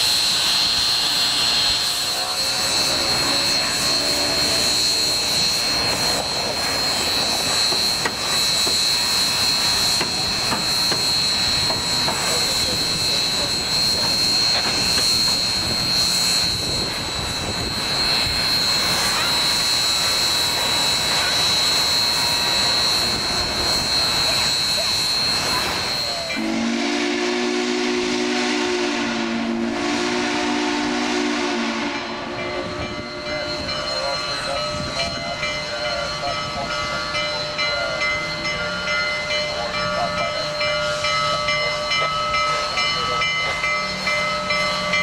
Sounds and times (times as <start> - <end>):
Steam: 0.0 - 45.0
Train: 0.0 - 45.0.